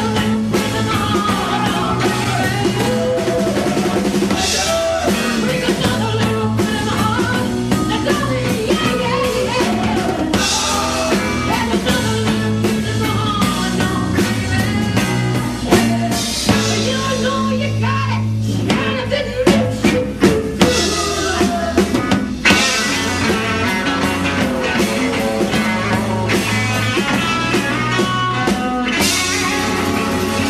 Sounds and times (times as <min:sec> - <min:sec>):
Music: 0:00.0 - 0:30.4
Singing: 0:00.0 - 0:30.4.